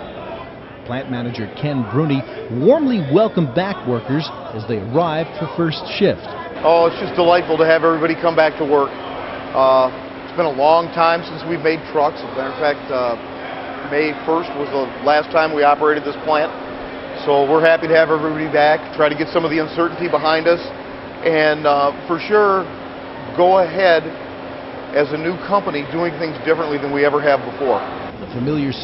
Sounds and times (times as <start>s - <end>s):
Speech: 0.8s - 8.9s, 9.6s - 13.2s, 23.3s - 24.2s, 25.0s - 28.8s.